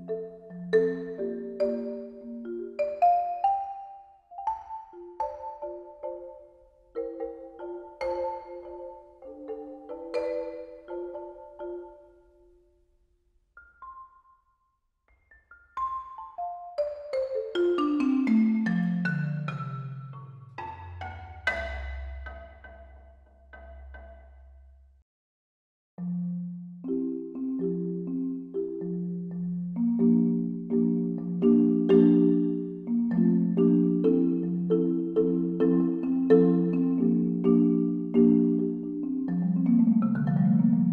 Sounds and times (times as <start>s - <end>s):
Glockenspiel: 0.0s - 12.8s, 13.6s - 24.8s, 26.0s - 40.9s
Marimba, xylophone: 0.0s - 12.8s, 13.6s - 24.9s, 26.0s - 40.9s.